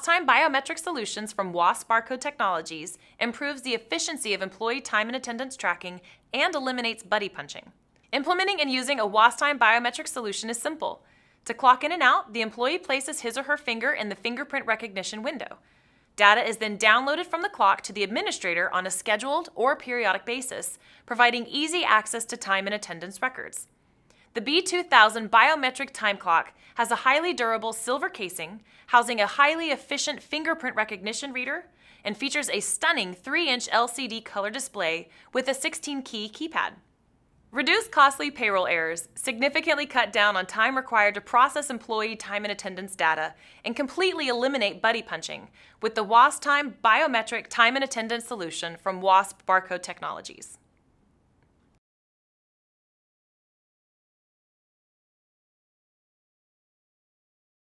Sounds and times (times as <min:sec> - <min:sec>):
Speech: 0:00.0 - 0:15.6, 0:16.2 - 0:23.7, 0:24.4 - 0:36.8, 0:37.5 - 0:50.6.